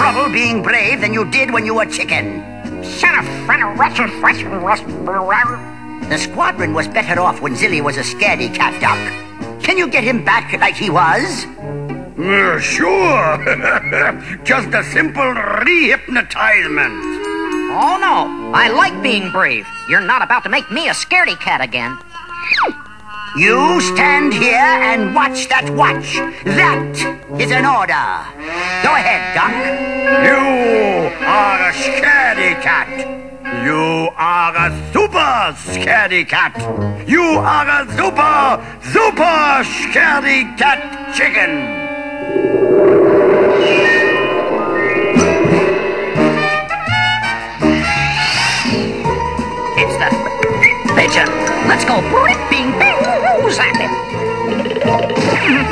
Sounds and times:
Speech: 0:00.0 - 0:11.6, 0:12.2 - 0:17.0, 0:17.7 - 0:22.0, 0:23.4 - 0:26.8, 0:33.6 - 0:41.5
Music: 0:00.0 - 0:42.5, 0:44.7 - 0:55.7.

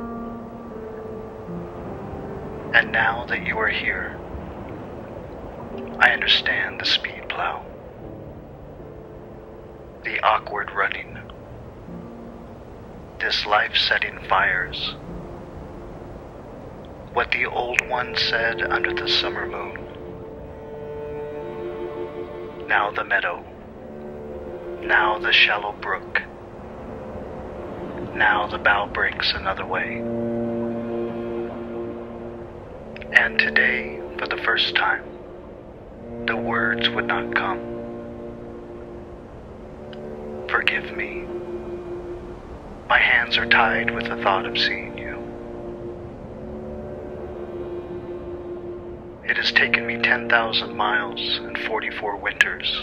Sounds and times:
Music: 0:00.0 - 0:52.8
Outside, rural or natural: 0:00.0 - 0:52.8
Speech: 0:02.8 - 0:04.2, 0:06.0 - 0:07.7, 0:10.1 - 0:11.3, 0:13.2 - 0:15.0, 0:17.1 - 0:19.9, 0:22.7 - 0:23.5, 0:24.8 - 0:26.3, 0:28.0 - 0:30.0, 0:33.0 - 0:35.1, 0:36.3 - 0:37.6, 0:40.5 - 0:41.2, 0:42.9 - 0:45.2, 0:49.3 - 0:52.8.

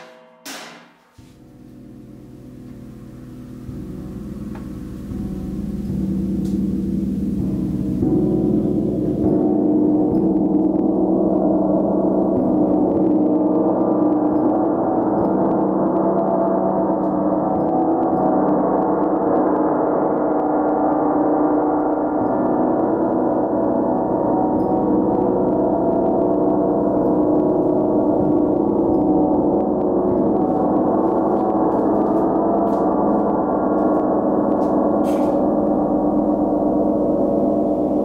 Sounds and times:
Gong: 0:00.0 - 0:38.0.

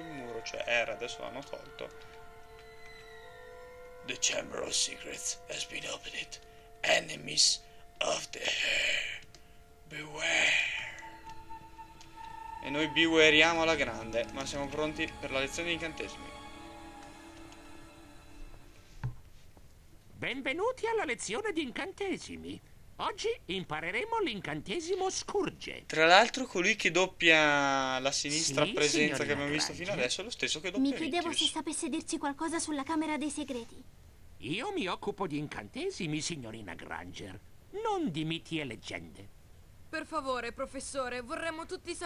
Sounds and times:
Speech: 0:00.0 - 0:01.9, 0:04.1 - 0:09.2, 0:09.9 - 0:11.0, 0:12.6 - 0:16.2, 0:20.2 - 0:33.8, 0:34.4 - 0:39.3.

